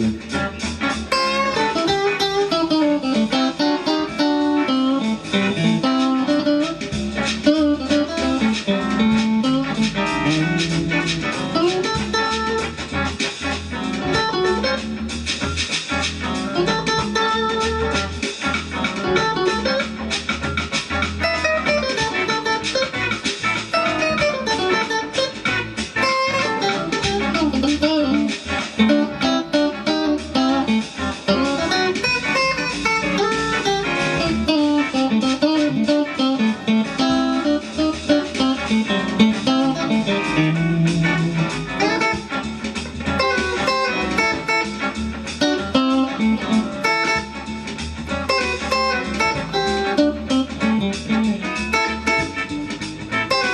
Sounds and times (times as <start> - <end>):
Blues: 0.0 - 53.5
Electric guitar: 0.0 - 53.5.